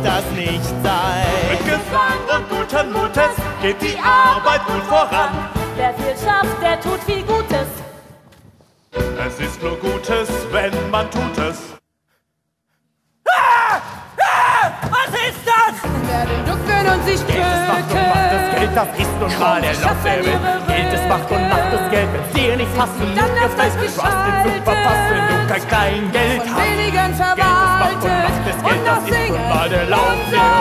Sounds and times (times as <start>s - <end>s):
Music: 0.0s - 8.3s, 8.9s - 11.8s, 15.7s - 30.6s.